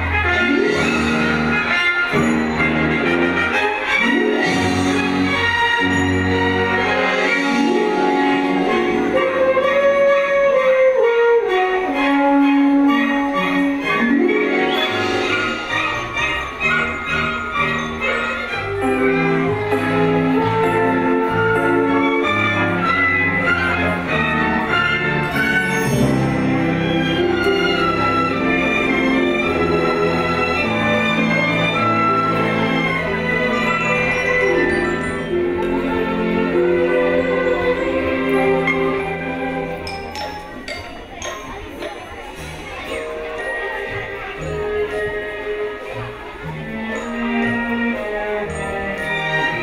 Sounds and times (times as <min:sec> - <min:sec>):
Music: 0:00.0 - 0:49.6.